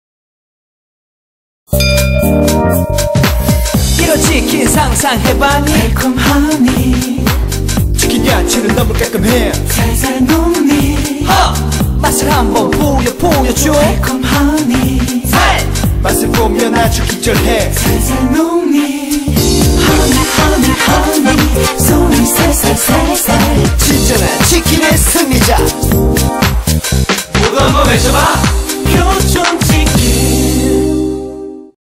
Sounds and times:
Music: 1.7 - 31.8.

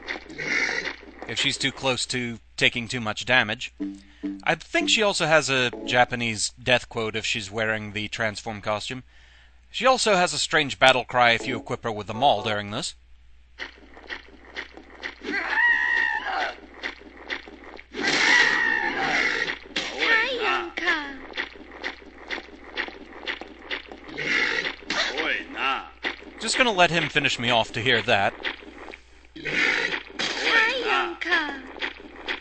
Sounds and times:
Speech: 1.3 - 3.8, 4.5 - 9.0, 9.8 - 13.0, 20.0 - 21.2, 25.1 - 28.4, 30.4 - 31.7.

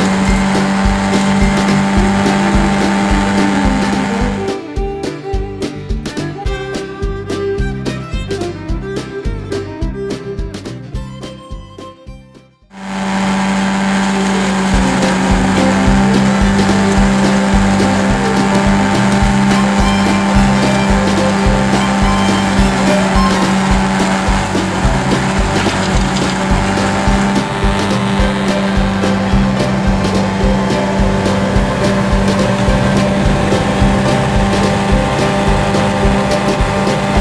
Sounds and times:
Music: 0.0 - 12.8, 13.8 - 37.2.

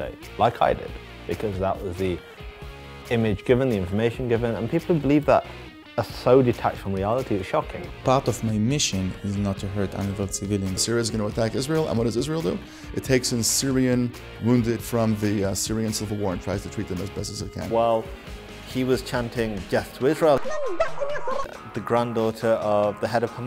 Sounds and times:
Speech: 0.0 - 2.2, 3.1 - 5.4, 6.0 - 18.1, 18.7 - 20.4, 21.6 - 23.4
Music: 0.0 - 23.4.

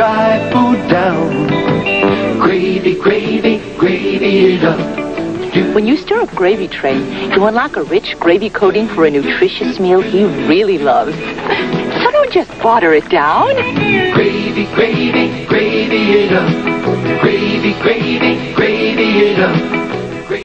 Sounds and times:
Music: 0.0 - 20.4
Speech: 5.8 - 11.2, 12.0 - 13.9.

